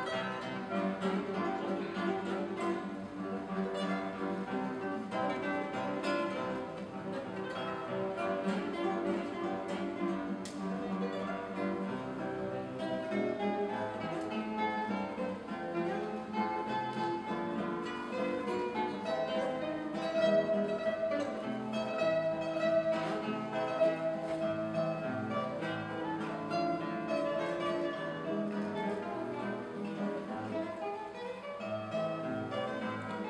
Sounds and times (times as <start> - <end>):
Guitar: 0.0 - 33.3.